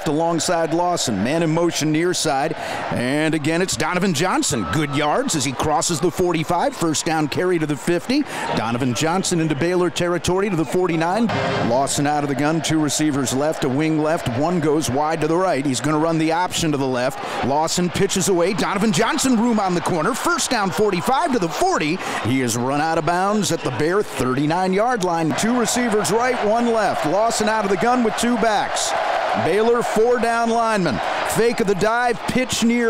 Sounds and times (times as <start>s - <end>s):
Speech: 0.0s - 32.8s.